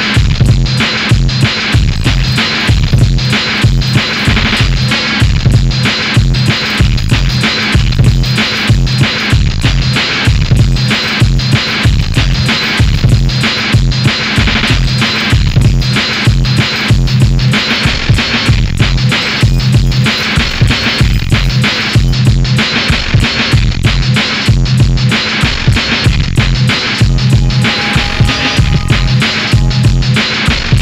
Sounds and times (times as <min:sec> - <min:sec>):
Techno: 0:00.0 - 0:30.8.